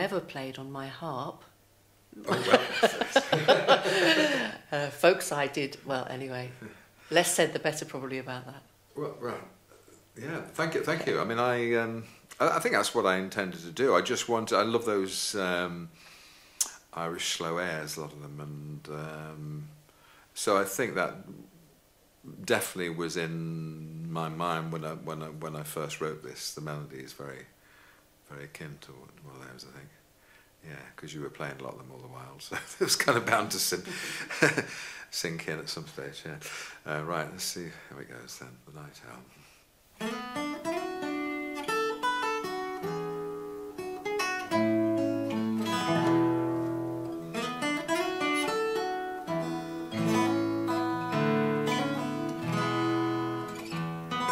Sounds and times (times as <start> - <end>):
Speech: 4.0 - 9.5, 10.2 - 15.9, 16.6 - 19.8, 20.4 - 21.5, 22.3 - 27.5, 28.3 - 30.0, 30.6 - 33.9, 35.1 - 39.3.